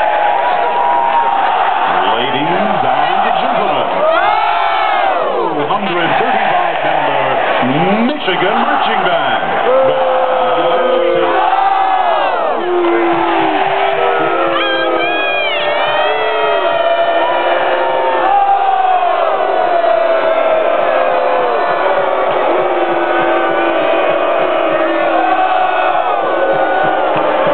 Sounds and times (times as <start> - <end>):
Crowd: 0.0 - 27.5.